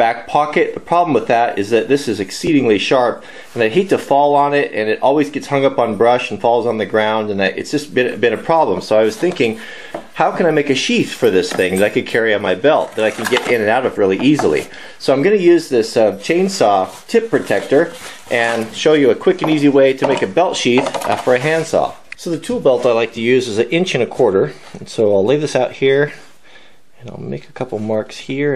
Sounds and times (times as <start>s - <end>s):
Speech: 0.0s - 9.6s, 10.2s - 26.3s, 27.0s - 28.5s.